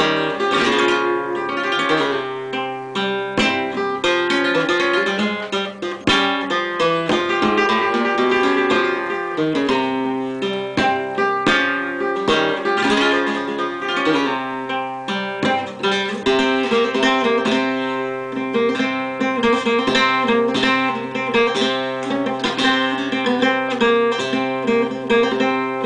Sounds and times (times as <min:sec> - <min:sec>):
Guitar: 0:00.0 - 0:25.8.